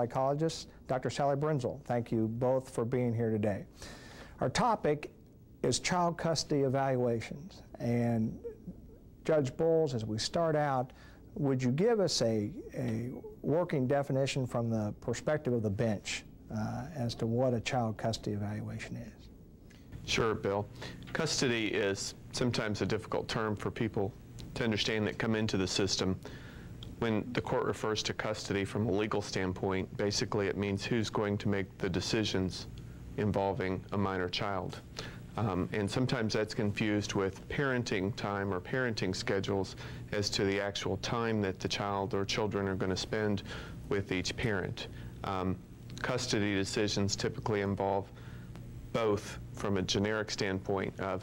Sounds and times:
Speech: 0:00.0 - 0:03.7, 0:04.4 - 0:19.3, 0:20.0 - 0:26.2, 0:26.9 - 0:48.2, 0:48.9 - 0:51.2.

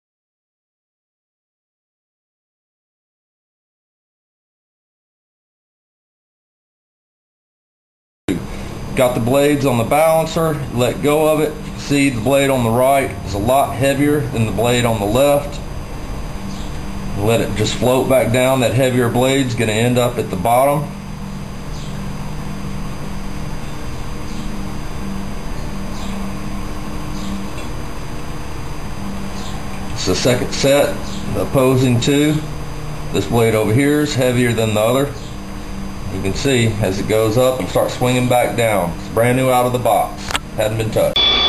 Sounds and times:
Speech: 0:09.0 - 0:15.6, 0:17.2 - 0:21.0, 0:30.0 - 0:32.5, 0:33.1 - 0:35.2, 0:36.1 - 0:41.2.

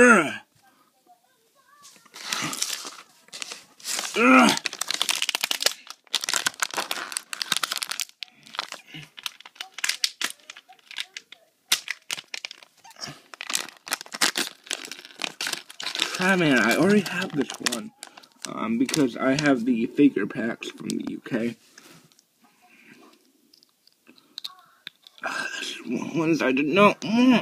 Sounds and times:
Inside, small room: 0:00.0 - 0:27.4.

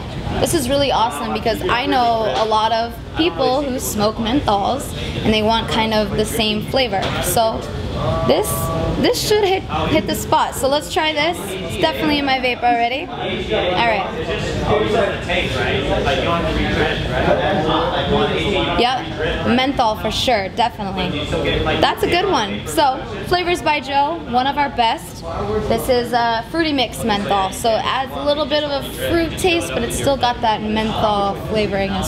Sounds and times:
Speech: 0:00.0 - 0:32.0.

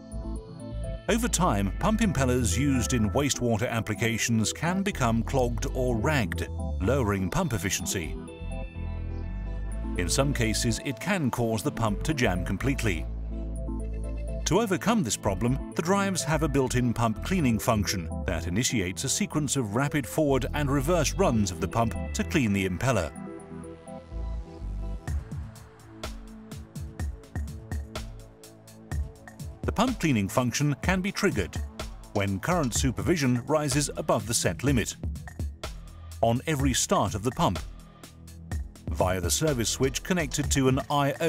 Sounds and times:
Music: 0:00.0 - 0:41.2
Speech: 0:01.1 - 0:08.2, 0:10.0 - 0:13.1, 0:14.5 - 0:23.2, 0:29.7 - 0:31.6, 0:32.2 - 0:35.0, 0:36.2 - 0:37.6, 0:38.9 - 0:41.2.

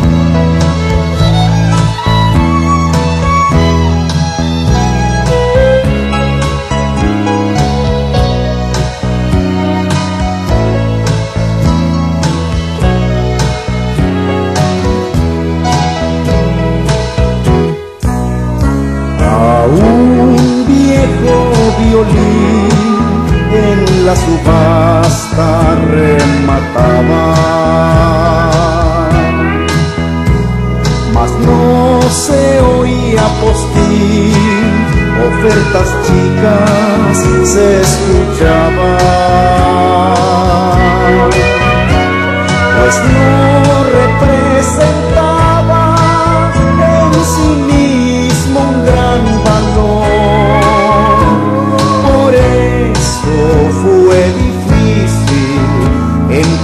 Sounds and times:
Violin, fiddle: 0:00.0 - 0:18.0, 0:19.2 - 0:54.9.

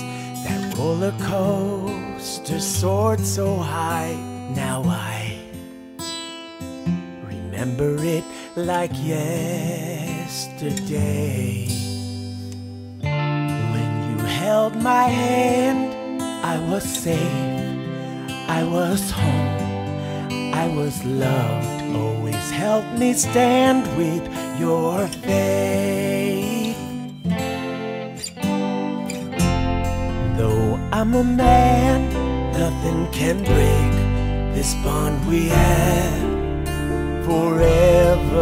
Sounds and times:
Acoustic guitar: 0:00.0 - 0:38.4.

